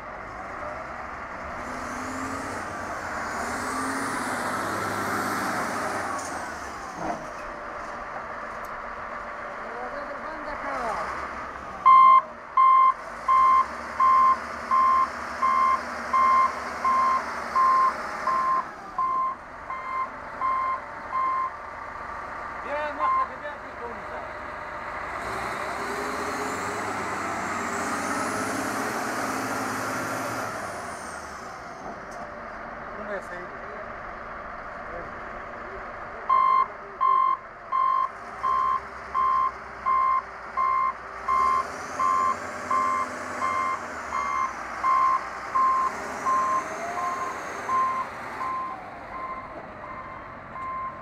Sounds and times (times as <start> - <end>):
Speech: 9.6 - 11.2, 22.6 - 24.4, 32.9 - 33.9.